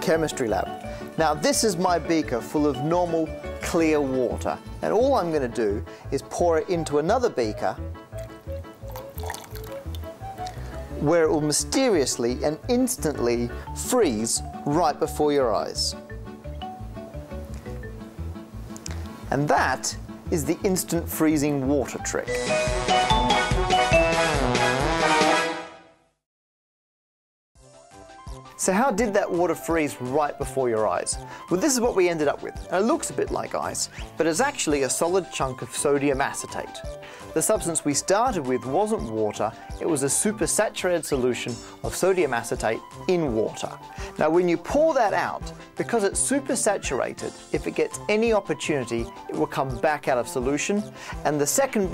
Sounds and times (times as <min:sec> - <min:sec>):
Speech: 0:00.0 - 0:07.8, 0:11.0 - 0:16.0, 0:19.3 - 0:22.4, 0:28.6 - 0:36.8, 0:37.4 - 0:51.9
Music: 0:00.0 - 0:26.2, 0:27.6 - 0:51.9.